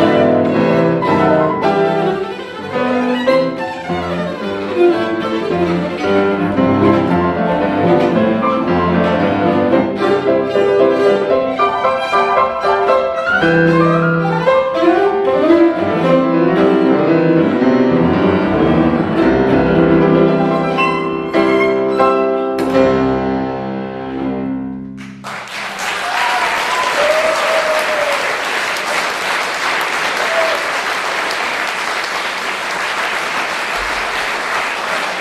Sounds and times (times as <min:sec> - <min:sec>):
Cello: 0:00.0 - 0:24.5.